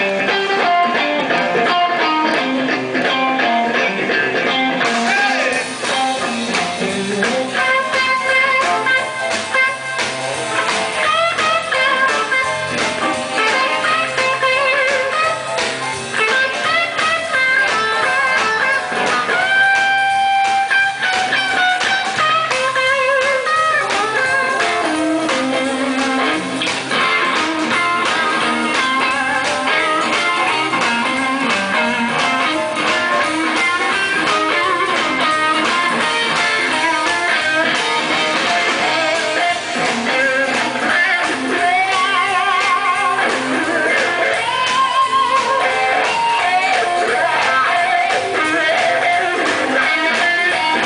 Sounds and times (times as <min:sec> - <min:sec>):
Guitar: 0:00.0 - 0:50.8.